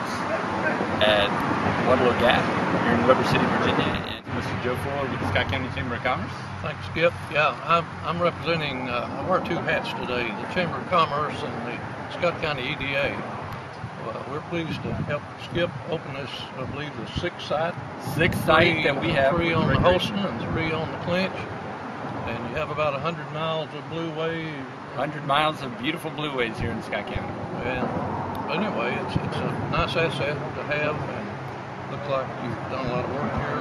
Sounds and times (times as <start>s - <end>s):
Speech: 0.0s - 13.3s, 14.0s - 21.5s, 22.3s - 33.6s.